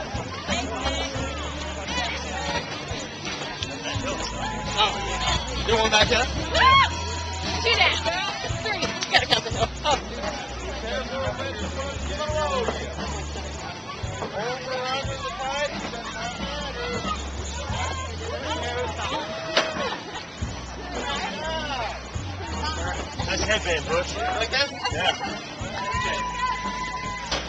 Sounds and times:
Music: 0.0s - 27.4s.

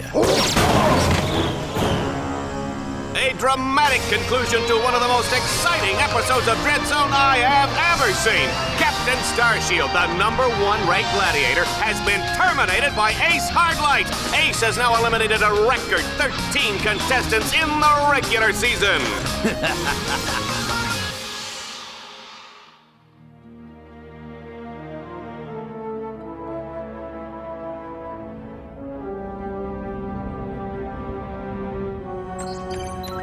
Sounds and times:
Music: 0.0s - 33.2s
Speech: 3.2s - 19.2s.

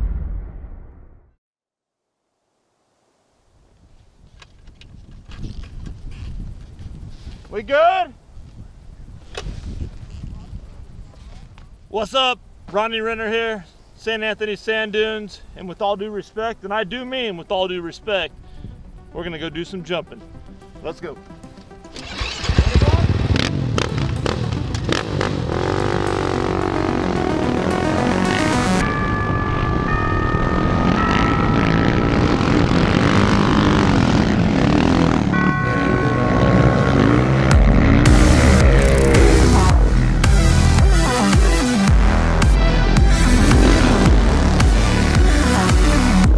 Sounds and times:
Speech: 7.5s - 8.2s, 11.9s - 18.3s, 19.2s - 20.2s, 20.8s - 21.2s, 22.6s - 23.2s
Music: 17.6s - 31.7s, 37.5s - 46.3s
Vehicle: 21.8s - 40.8s, 43.0s - 46.3s.

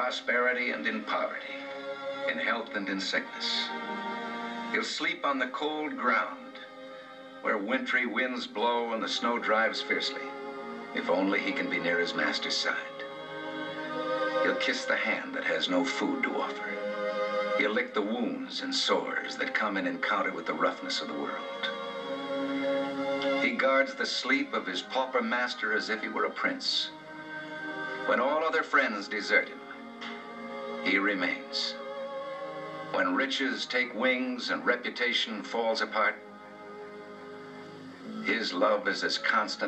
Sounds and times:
Speech: 0.0s - 1.6s, 2.3s - 3.7s, 4.8s - 6.5s, 7.5s - 10.3s, 11.0s - 13.0s, 14.4s - 16.8s, 17.6s - 21.5s, 23.4s - 26.9s, 28.1s - 29.6s, 30.9s - 31.8s, 33.0s - 36.2s, 38.1s - 39.6s
Music: 0.0s - 39.6s.

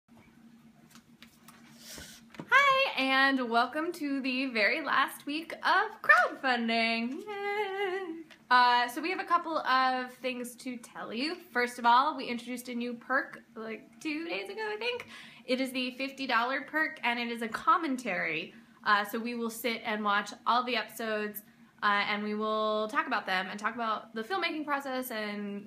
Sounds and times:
Inside, small room: 0.1s - 25.6s
Speech: 2.5s - 25.6s.

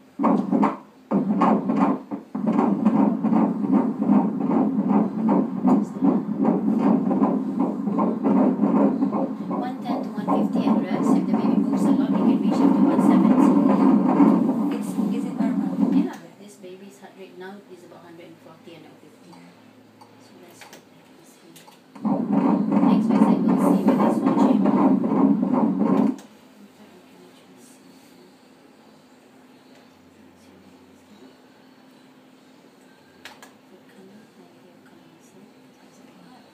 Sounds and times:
Speech: 9.6s - 13.8s, 14.8s - 19.6s, 20.2s - 21.8s, 22.8s - 24.8s, 26.6s - 28.5s, 33.7s - 36.5s.

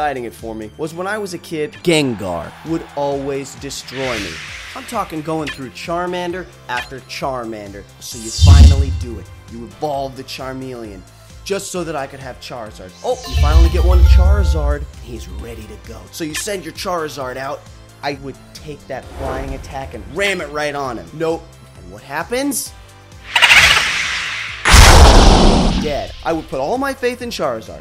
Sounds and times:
Speech: 0.0s - 22.8s, 25.8s - 27.8s
Music: 0.0s - 27.8s.

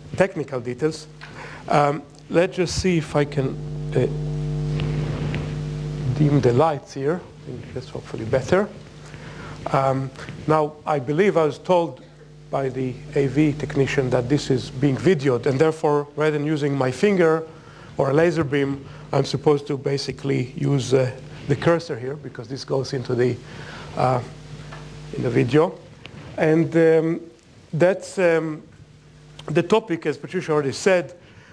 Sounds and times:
Speech: 0.2s - 1.1s, 1.7s - 4.1s, 6.0s - 8.8s, 9.7s - 23.4s, 24.0s - 24.4s, 25.1s - 28.7s, 29.4s - 31.2s.

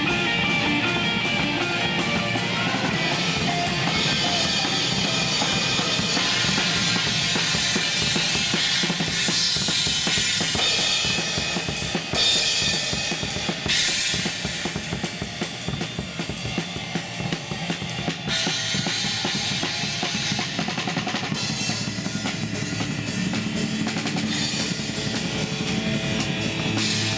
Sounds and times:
Cymbal: 0.0s - 27.1s.

